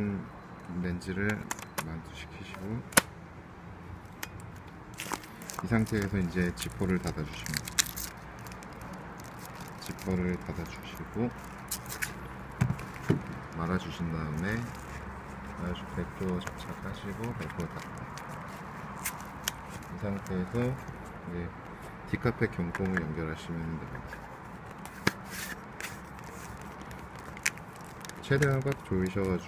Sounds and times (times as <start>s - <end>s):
Speech: 0.0s - 2.9s, 5.6s - 7.6s, 9.8s - 11.4s, 13.6s - 14.8s, 15.6s - 17.9s, 19.9s - 24.1s, 28.2s - 29.4s.